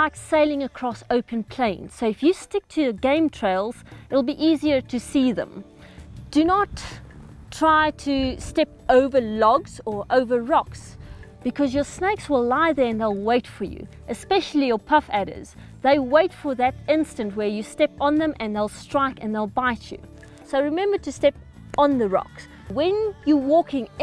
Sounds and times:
Speech: 0:00.0 - 0:05.6, 0:06.4 - 0:07.0, 0:07.6 - 0:24.0
Music: 0:00.0 - 0:24.0.

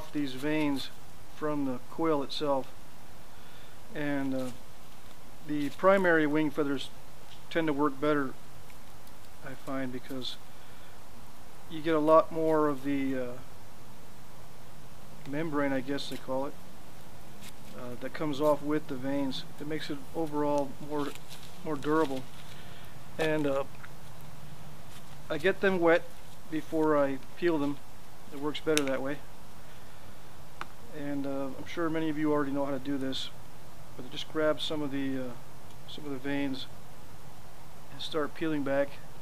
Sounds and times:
Speech: 0:00.0 - 0:02.7, 0:04.0 - 0:04.6, 0:05.5 - 0:06.9, 0:07.5 - 0:08.4, 0:09.4 - 0:10.4, 0:11.7 - 0:13.5, 0:15.3 - 0:16.6, 0:17.7 - 0:22.3, 0:23.2 - 0:23.7, 0:25.3 - 0:29.3, 0:30.9 - 0:33.4, 0:34.0 - 0:36.7, 0:37.9 - 0:39.0.

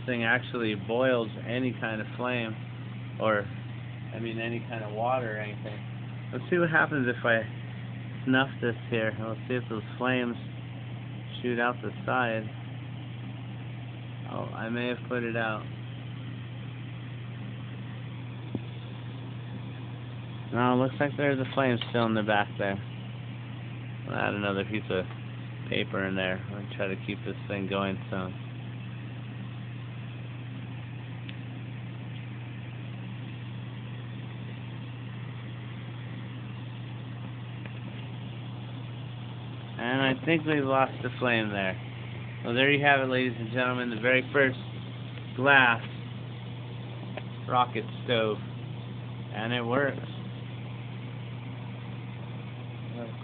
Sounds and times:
Speech: 0:00.0 - 0:02.6, 0:03.2 - 0:03.5, 0:04.1 - 0:07.5, 0:08.3 - 0:10.5, 0:11.3 - 0:12.5, 0:14.3 - 0:15.7, 0:20.5 - 0:22.9, 0:24.1 - 0:25.1, 0:25.7 - 0:28.4, 0:39.8 - 0:41.8, 0:42.4 - 0:44.7, 0:45.4 - 0:45.9, 0:47.5 - 0:48.5, 0:49.3 - 0:50.2, 0:52.9 - 0:53.2.

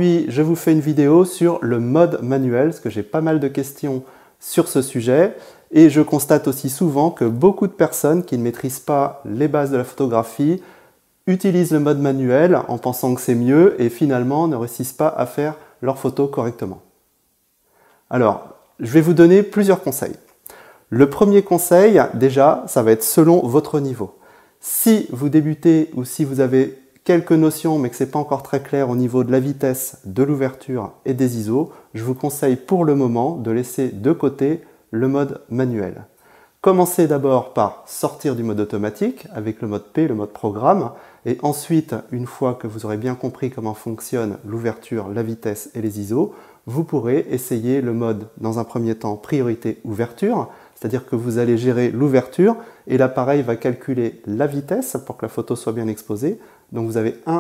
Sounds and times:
Speech: 0:00.0 - 0:10.6, 0:11.2 - 0:16.9, 0:18.1 - 0:20.3, 0:20.9 - 0:57.4.

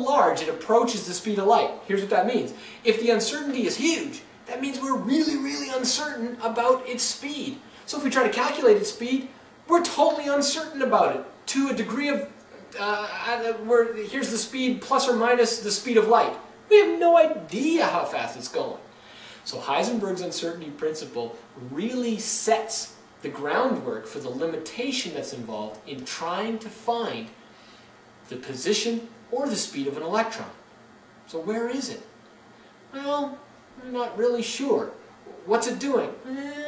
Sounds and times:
Speech: 0:00.0 - 0:27.4, 0:28.2 - 0:30.6, 0:31.3 - 0:32.1, 0:32.9 - 0:36.6.

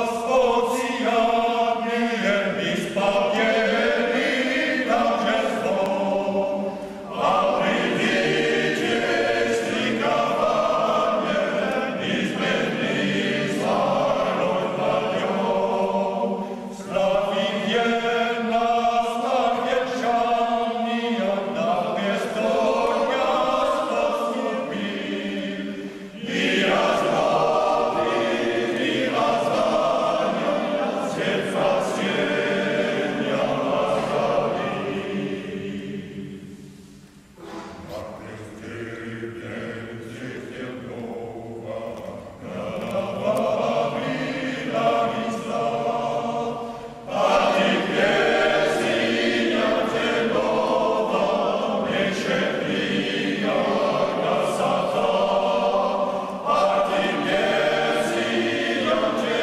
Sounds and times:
Mantra: 0:00.0 - 0:36.6, 0:37.4 - 0:59.4.

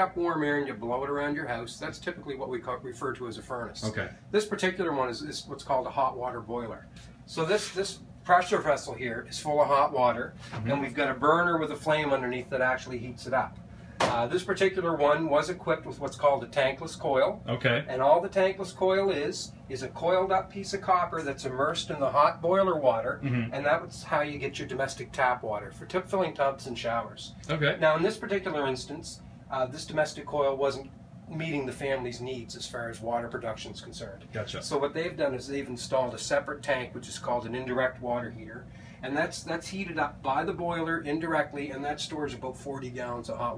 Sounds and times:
Speech: 0:00.0 - 0:13.5, 0:14.1 - 0:43.5.

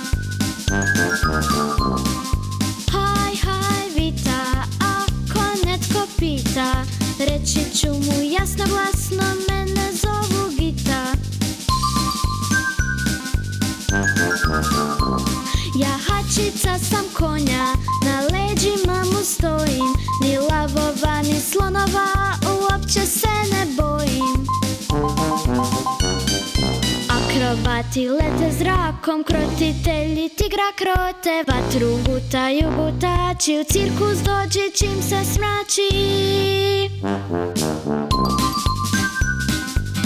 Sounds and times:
Music: 0:00.0 - 0:40.0.

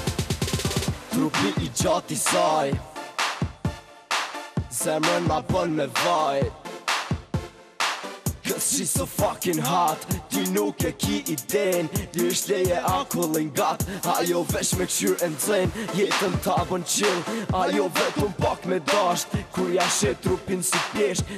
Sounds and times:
Exciting music: 0:00.0 - 0:21.3.

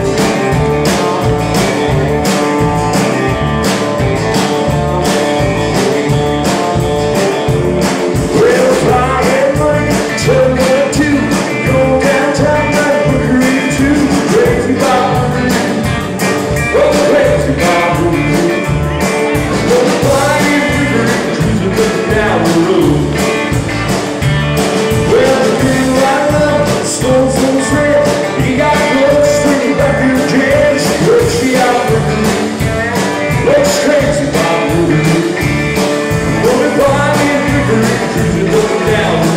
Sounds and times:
Rock and roll: 0:00.0 - 0:39.3.

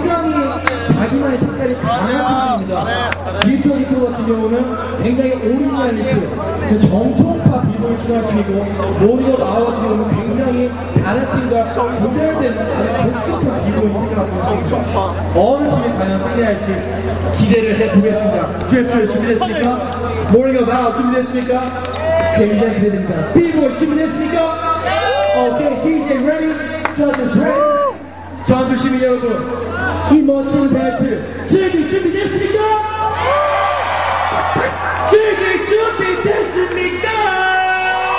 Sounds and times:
Speech: 0:00.0 - 0:27.8, 0:28.4 - 0:33.0, 0:35.1 - 0:38.1.

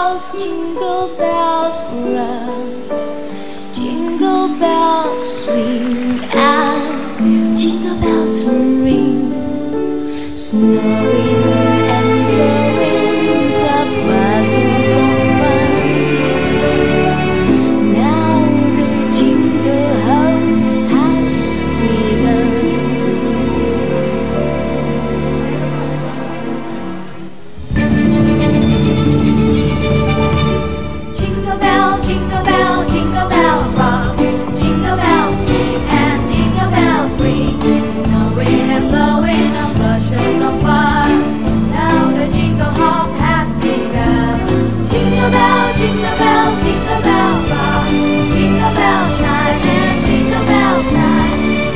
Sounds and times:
Music: 0:00.0 - 0:51.7.

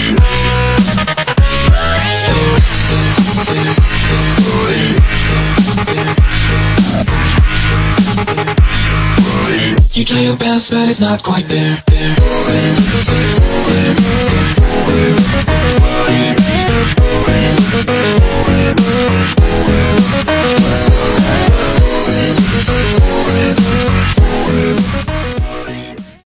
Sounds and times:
Dubstep: 0:00.0 - 0:26.2.

